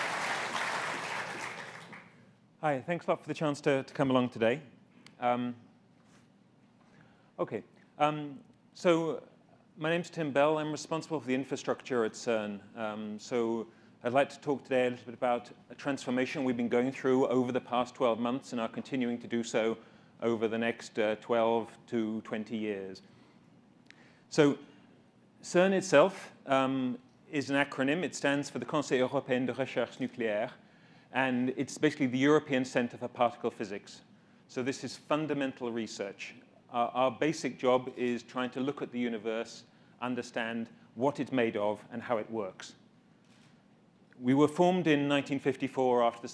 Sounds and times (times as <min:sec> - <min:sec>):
Speech: 0:02.6 - 0:05.6, 0:07.4 - 0:23.1, 0:24.3 - 0:24.7, 0:25.4 - 0:30.6, 0:31.2 - 0:42.8, 0:44.2 - 0:46.3.